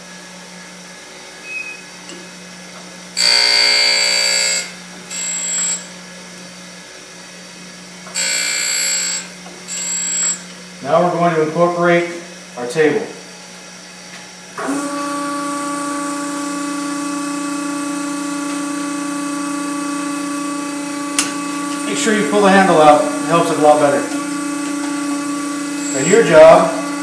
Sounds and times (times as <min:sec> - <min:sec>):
Power tool: 0:03.1 - 0:06.0, 0:08.0 - 0:10.5, 0:14.5 - 0:27.0
Speech: 0:10.8 - 0:13.2, 0:21.8 - 0:24.2, 0:25.9 - 0:26.8.